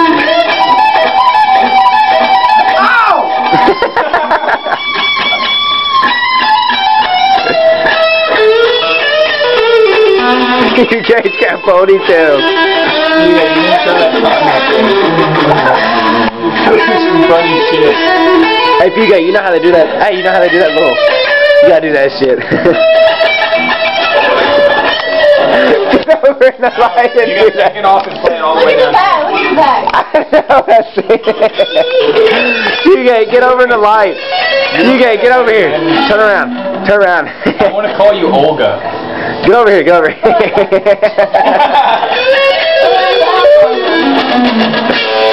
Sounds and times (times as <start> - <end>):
Acoustic guitar: 0.0 - 45.3.